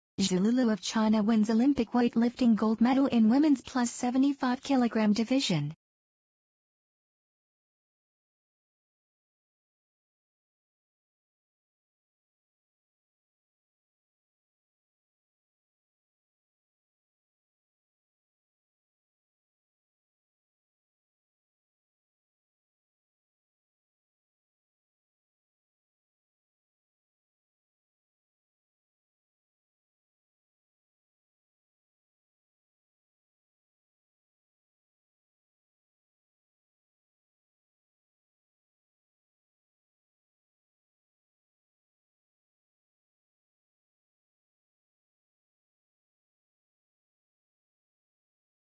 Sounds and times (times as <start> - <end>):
Speech: 0.2 - 5.8.